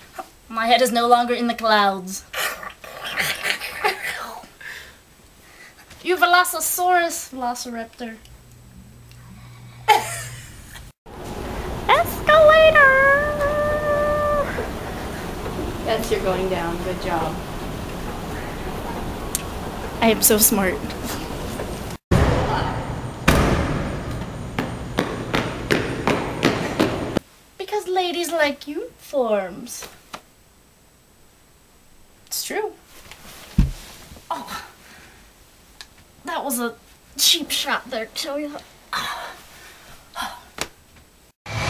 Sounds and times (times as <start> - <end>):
Speech: 0.5 - 2.2, 11.9 - 14.6, 15.9 - 17.4, 20.0 - 21.0, 27.6 - 29.9, 32.3 - 32.8, 36.2 - 38.7.